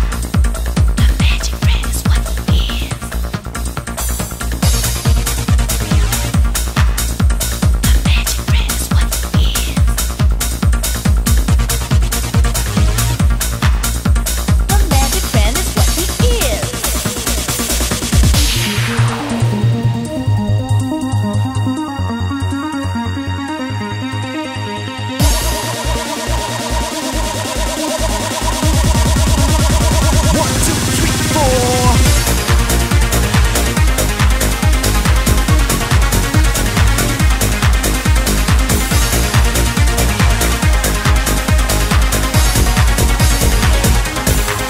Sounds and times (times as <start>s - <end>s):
Music: 0.0s - 44.6s.